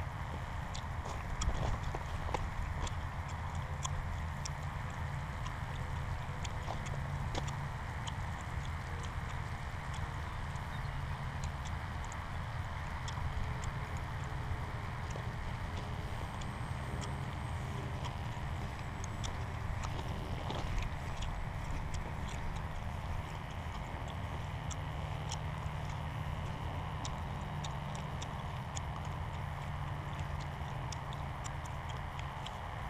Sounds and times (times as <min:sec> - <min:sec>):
Outside, rural or natural: 0:00.0 - 0:32.8.